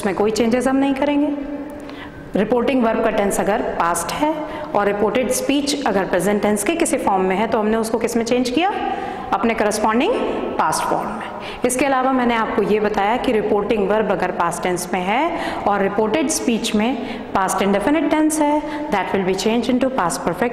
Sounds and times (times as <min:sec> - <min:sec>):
Female speech, woman speaking: 0:00.0 - 0:01.4, 0:02.4 - 0:08.8, 0:09.4 - 0:20.5.